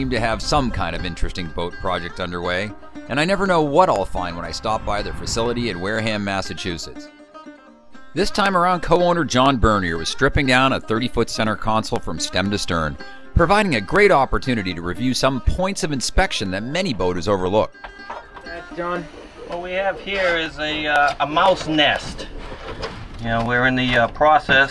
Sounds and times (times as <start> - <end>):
Speech: 0.0 - 7.0, 8.2 - 17.7, 18.5 - 22.3, 23.2 - 24.7
Music: 0.0 - 24.7.